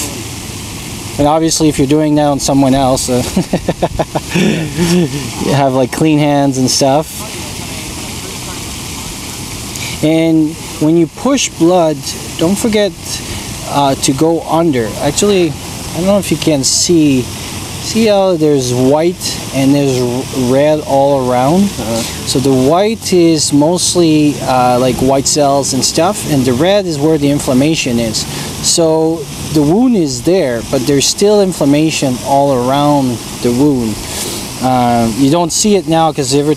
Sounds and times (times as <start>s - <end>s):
Outside, urban or manmade: 0.0s - 36.5s
Speech: 1.2s - 3.4s, 5.2s - 8.8s, 10.0s - 34.0s, 34.6s - 36.5s.